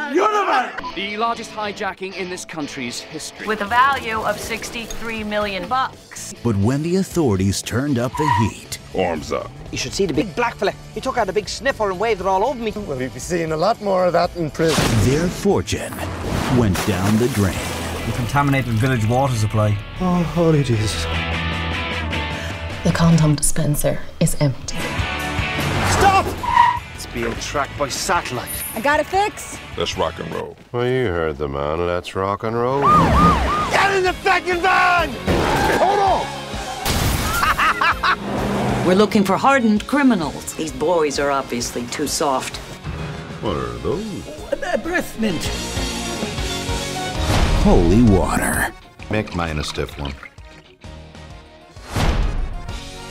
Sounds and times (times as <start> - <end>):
Music: 0.0 - 53.1.